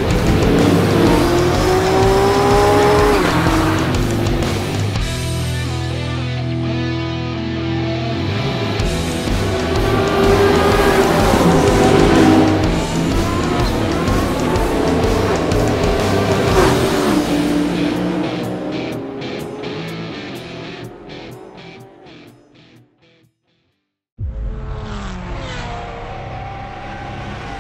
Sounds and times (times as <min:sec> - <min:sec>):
Music: 0:00.0 - 0:24.0
Car passing by: 0:09.2 - 0:19.4.